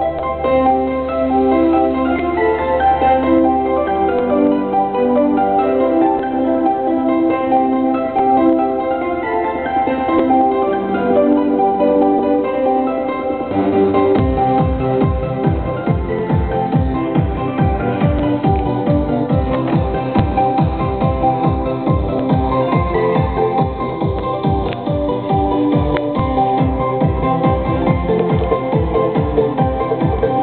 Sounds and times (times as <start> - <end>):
Christmas music: 0.0 - 30.4.